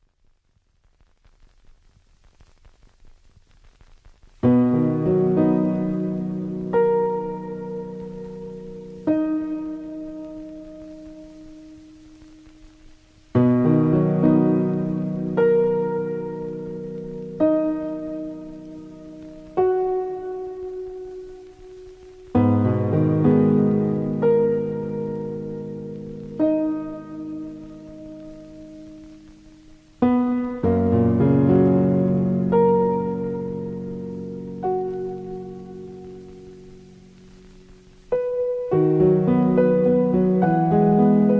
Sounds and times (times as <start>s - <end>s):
Music: 4.4s - 41.3s.